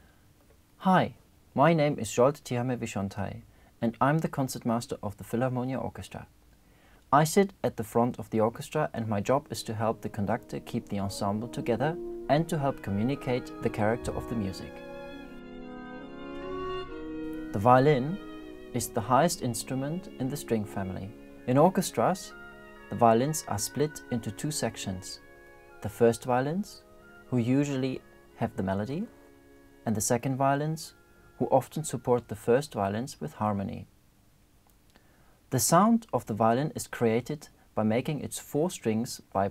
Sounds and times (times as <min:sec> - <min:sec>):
Speech: 0:00.8 - 0:06.3, 0:07.1 - 0:14.8, 0:17.5 - 0:18.2, 0:18.8 - 0:25.2, 0:25.8 - 0:29.1, 0:29.9 - 0:33.9, 0:35.5 - 0:39.5
Violin, fiddle: 0:09.3 - 0:29.3.